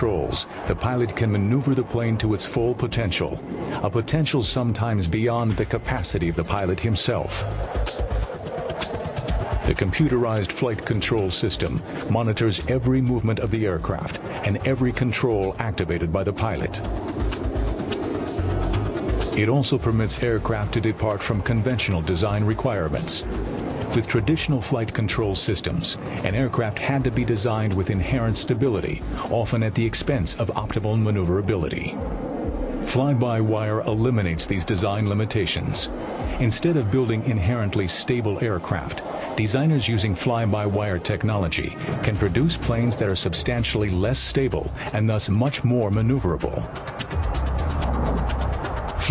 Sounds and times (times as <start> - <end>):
Speech: 0.0 - 7.5, 9.7 - 16.8, 19.4 - 23.3, 23.9 - 32.0, 32.8 - 46.7
Fixed-wing aircraft, airplane: 0.0 - 12.1, 13.4 - 19.4, 20.0 - 24.3, 24.9 - 29.3, 35.0 - 36.4, 37.2 - 39.4, 40.1 - 43.7, 46.3 - 49.1
Music: 0.0 - 49.1.